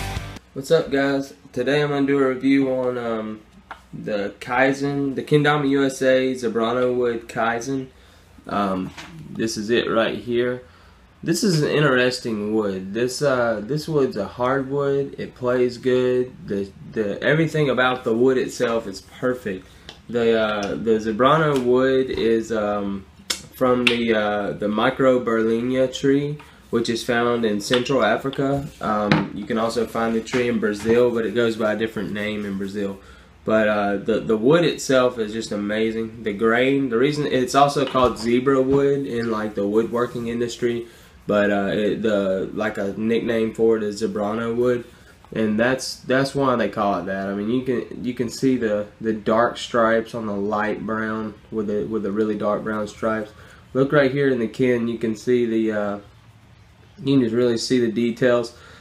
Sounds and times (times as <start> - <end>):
Speech: 0.5 - 56.2, 57.0 - 58.6.